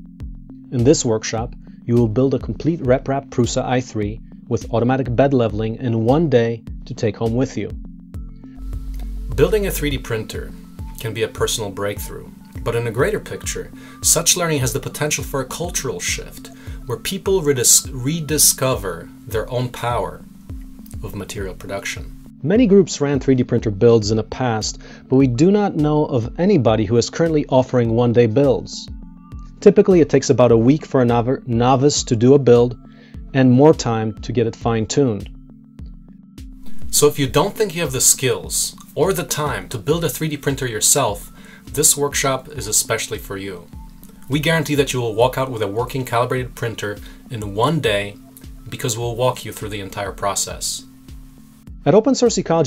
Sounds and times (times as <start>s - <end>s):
Music: 0.0s - 52.6s
Speech: 0.8s - 7.8s, 9.4s - 20.2s, 21.0s - 28.9s, 29.6s - 32.8s, 33.4s - 35.3s, 37.0s - 43.7s, 44.3s - 50.8s, 51.9s - 52.6s.